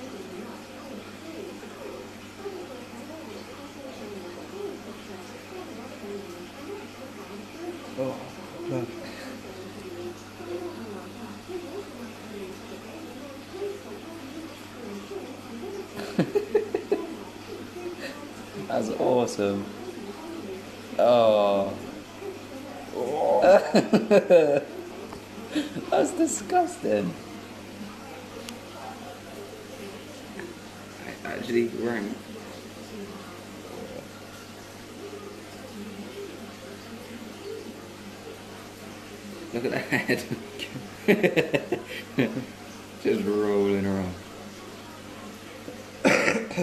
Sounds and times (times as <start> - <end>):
Speech: 0.0 - 16.0.